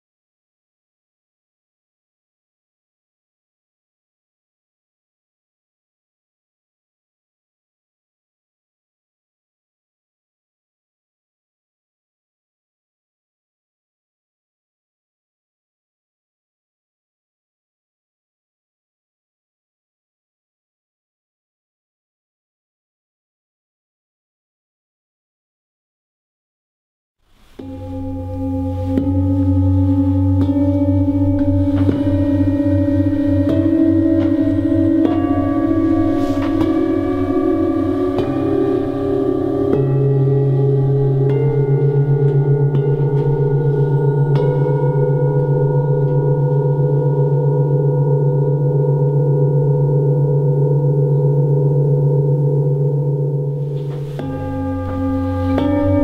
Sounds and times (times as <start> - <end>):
Singing bowl: 27.4 - 56.0.